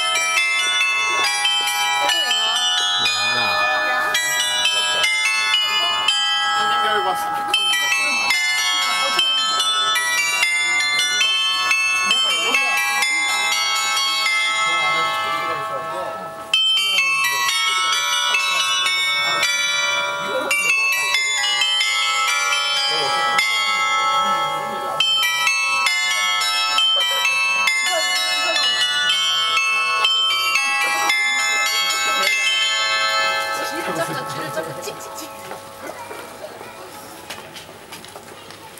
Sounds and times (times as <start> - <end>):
Speech: 0.6 - 38.8.